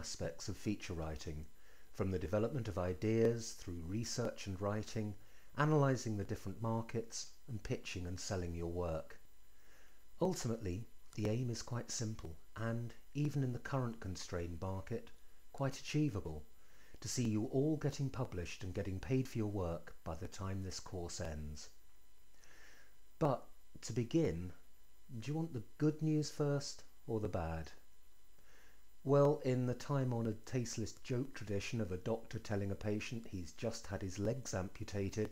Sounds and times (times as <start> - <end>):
Speech: 0.0 - 9.2, 10.2 - 21.8, 23.2 - 27.8, 29.0 - 35.3.